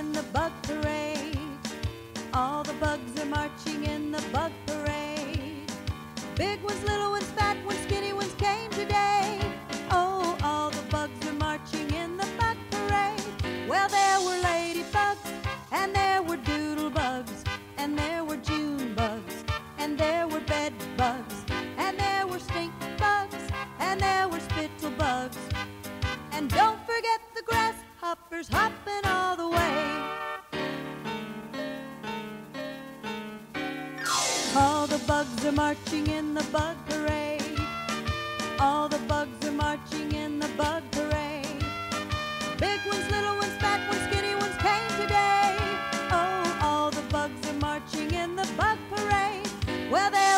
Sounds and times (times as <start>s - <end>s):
Music: 0.0s - 50.3s.